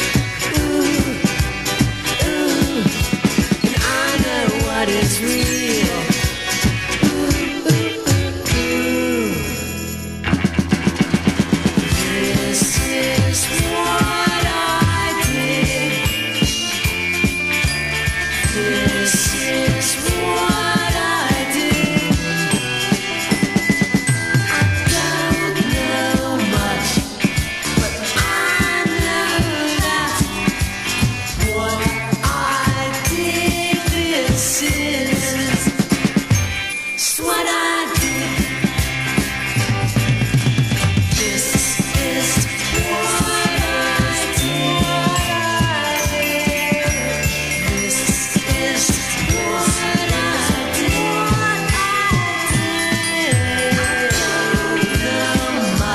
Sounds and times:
Ska: 0.0 - 55.9.

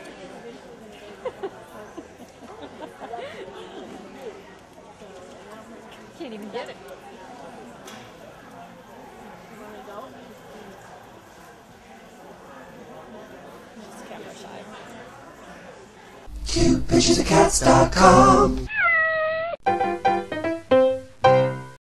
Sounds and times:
Speech: 0.0 - 18.4
Meow: 18.7 - 19.6
Music: 19.6 - 21.8.

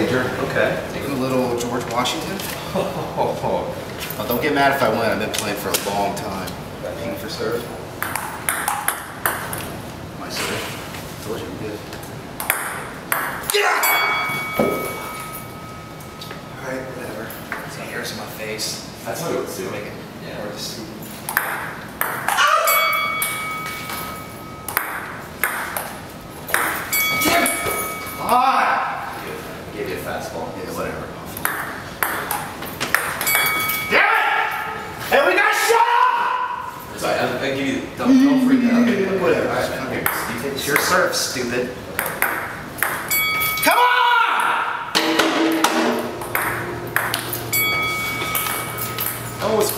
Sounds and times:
Ping: 12.4 - 16.5, 21.3 - 28.3, 31.4 - 34.5, 42.0 - 49.7.

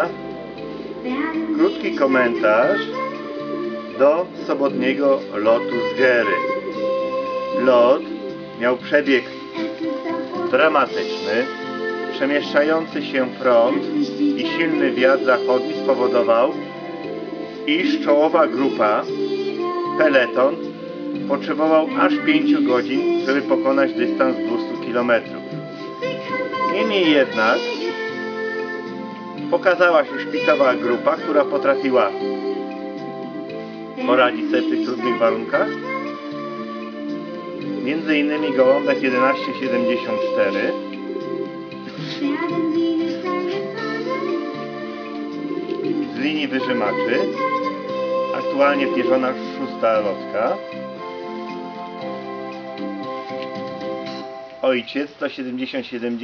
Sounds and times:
Music: 0.0 - 56.2
Speech: 1.1 - 3.0, 4.0 - 6.4, 7.6 - 8.0, 8.6 - 9.3, 10.4 - 11.5, 12.1 - 16.6, 17.7 - 19.1, 20.0 - 20.6, 21.3 - 25.3, 26.1 - 27.8, 29.5 - 32.2, 34.0 - 35.8, 37.8 - 40.8, 46.1 - 47.4, 48.4 - 50.6, 54.6 - 56.2.

